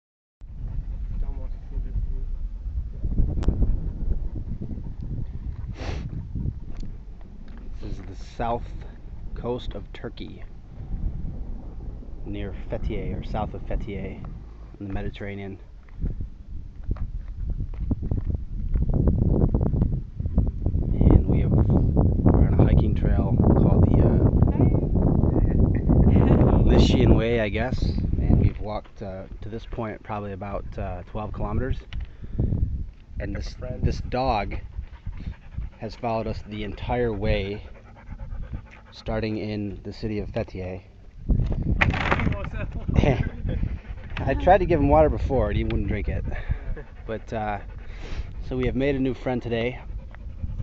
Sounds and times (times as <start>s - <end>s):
Speech: 1.2s - 2.3s, 7.8s - 10.5s, 12.2s - 15.6s, 21.0s - 21.7s, 22.4s - 24.8s, 26.2s - 31.8s, 33.2s - 34.6s, 35.8s - 37.7s, 39.0s - 40.9s, 44.2s - 46.4s, 47.1s - 47.6s, 48.4s - 49.8s.